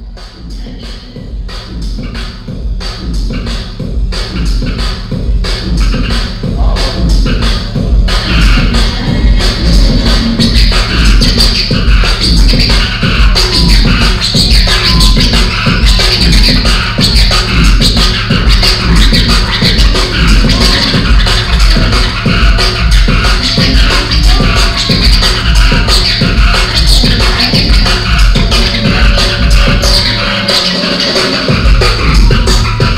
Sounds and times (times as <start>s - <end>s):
Drum and bass: 0.0s - 32.9s
Scratching (performance technique): 0.0s - 32.9s.